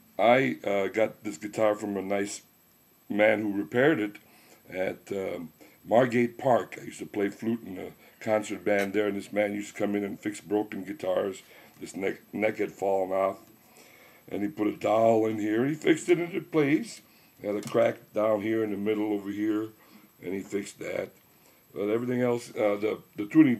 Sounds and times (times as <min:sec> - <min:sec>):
Speech: 0:00.2 - 0:02.5, 0:03.1 - 0:13.5, 0:14.3 - 0:23.5.